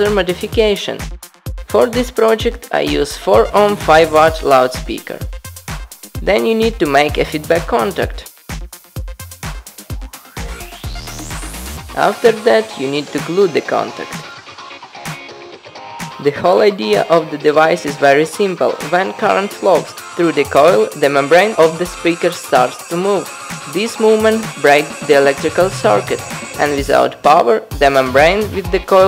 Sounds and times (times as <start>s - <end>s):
Speech: 0.0s - 1.1s, 1.7s - 5.3s, 6.2s - 8.3s, 12.0s - 14.2s, 16.2s - 29.0s
Music: 0.0s - 29.0s.